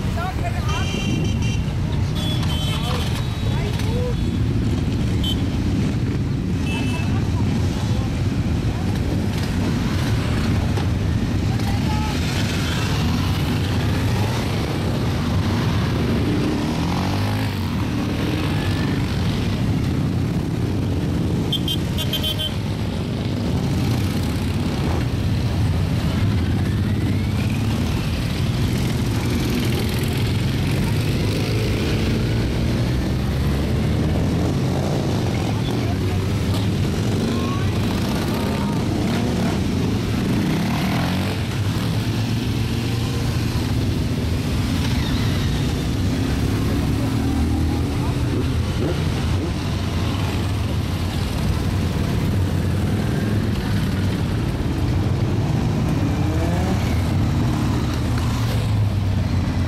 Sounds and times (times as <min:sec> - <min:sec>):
Vehicle: 0:00.0 - 0:59.6.